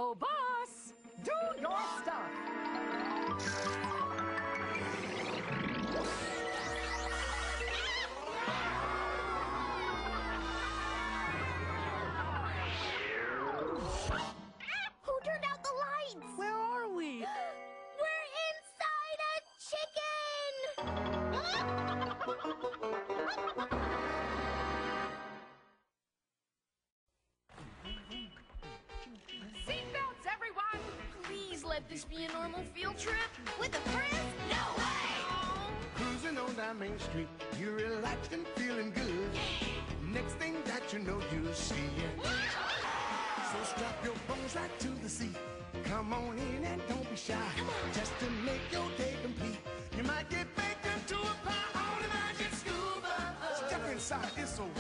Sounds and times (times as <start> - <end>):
Music: 0.0 - 25.8, 27.6 - 54.8.